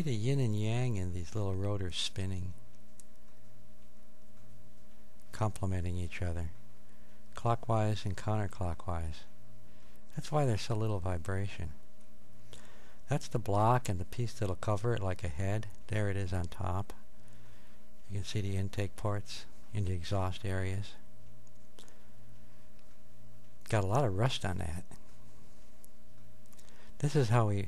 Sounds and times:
Speech: 0.0 - 2.6, 5.3 - 6.6, 7.4 - 9.4, 10.1 - 11.8, 13.1 - 17.0, 18.0 - 21.0, 23.6 - 25.0, 27.0 - 27.6.

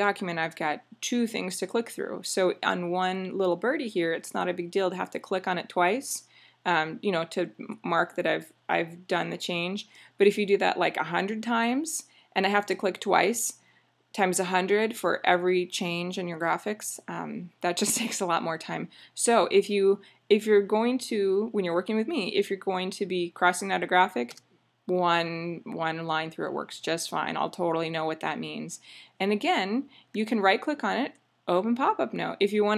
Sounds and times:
Speech: 0.0 - 13.6, 14.2 - 32.7.

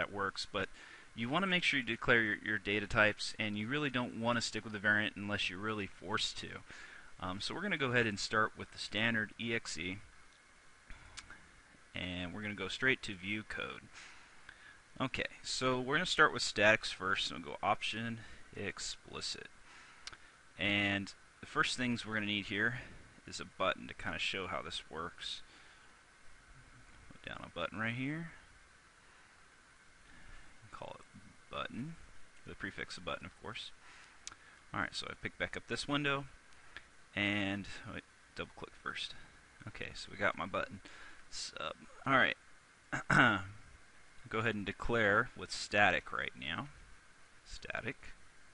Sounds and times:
Speech: 0.0 - 10.1, 12.0 - 13.9, 15.0 - 19.5, 20.6 - 25.5, 27.2 - 28.4, 30.7 - 33.8, 34.7 - 36.4, 37.2 - 42.4, 43.0 - 43.6, 44.3 - 46.8, 47.5 - 48.2.

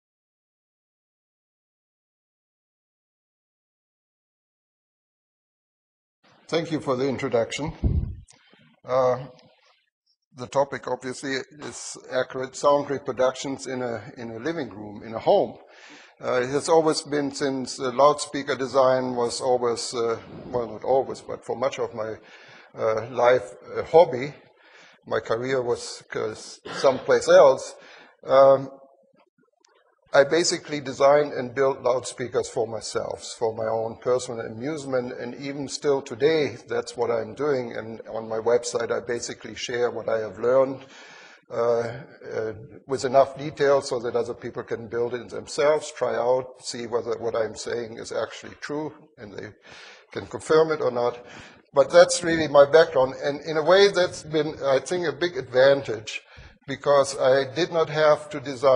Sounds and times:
Speech: 6.5 - 8.2, 8.9 - 9.4, 10.4 - 24.4, 25.1 - 28.8, 30.1 - 58.7.

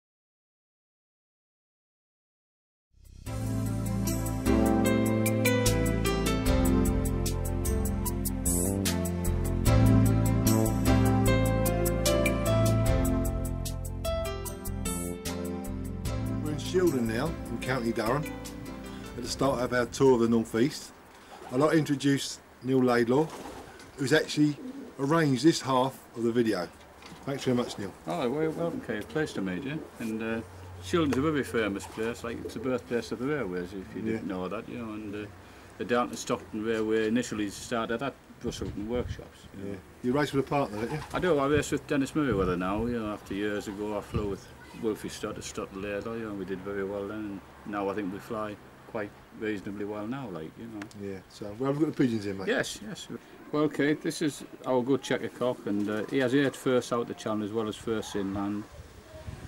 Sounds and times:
Speech: 27.3 - 58.7.

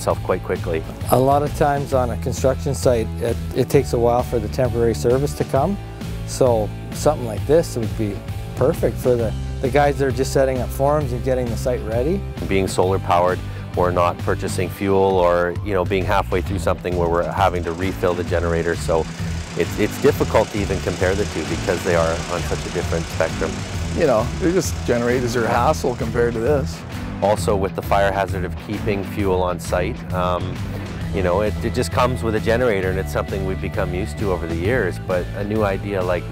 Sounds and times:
Music: 0.0 - 36.3
Speech: 0.0 - 36.3.

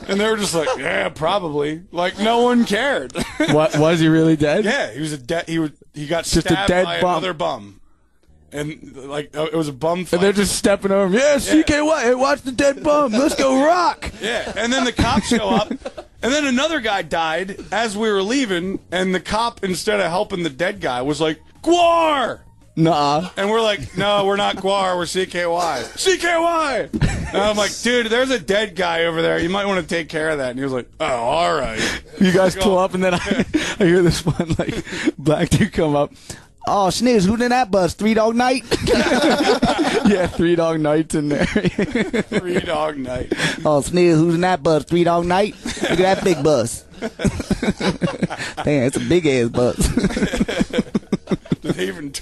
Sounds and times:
Speech: 0.0 - 7.8, 8.5 - 46.9, 51.6 - 52.2.

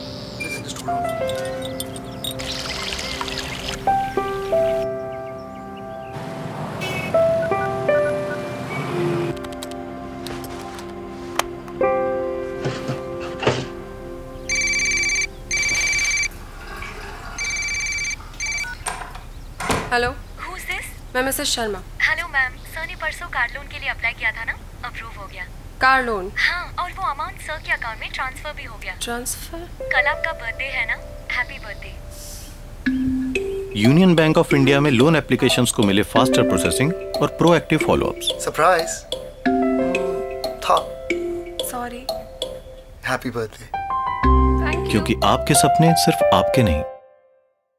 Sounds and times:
Speech: 19.9 - 32.0, 33.8 - 39.0, 43.1 - 43.7, 44.6 - 46.9.

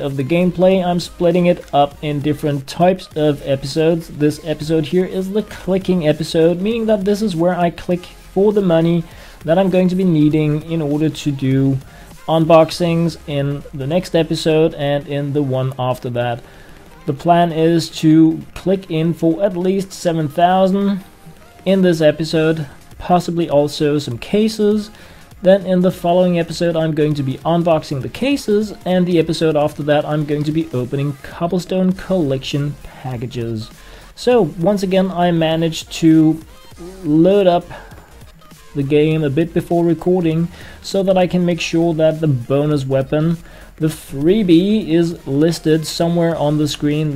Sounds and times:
Speech: 0.0 - 16.4, 17.1 - 21.0, 21.6 - 37.8, 38.8 - 47.1
Music: 0.0 - 47.1.

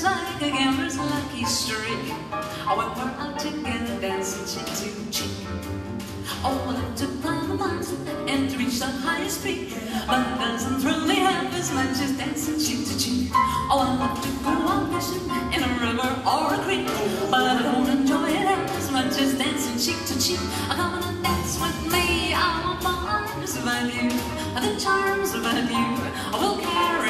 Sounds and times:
Female singing: 0.0 - 5.3, 6.3 - 27.1
Music: 0.0 - 27.1.

